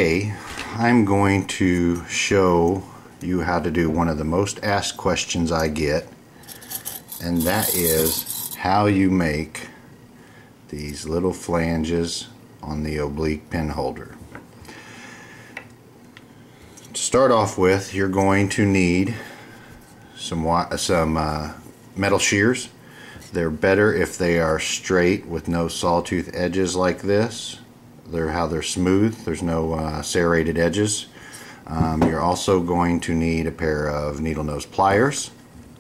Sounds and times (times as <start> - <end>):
Speech: 0.0 - 6.1, 7.2 - 9.8, 10.7 - 14.2, 16.9 - 19.3, 20.2 - 31.1, 31.7 - 35.4
Tools: 6.4 - 8.6.